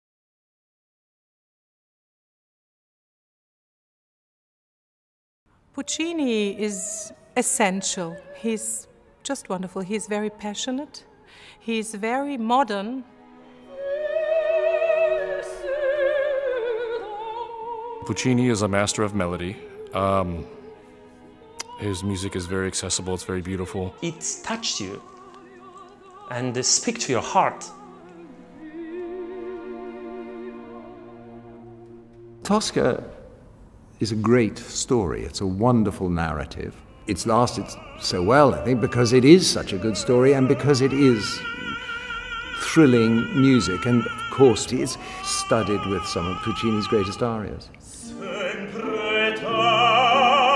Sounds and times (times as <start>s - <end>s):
Opera: 5.7s - 50.5s.